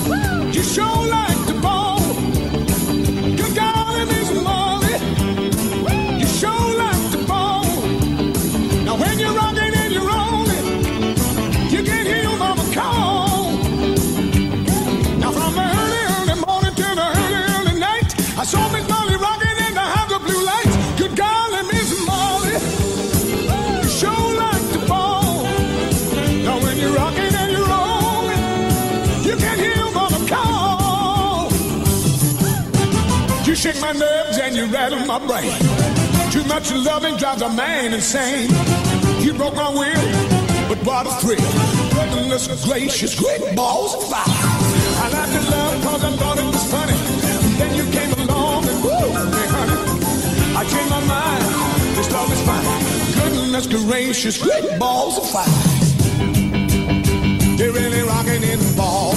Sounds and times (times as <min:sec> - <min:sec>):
Rock and roll: 0:00.0 - 0:59.1.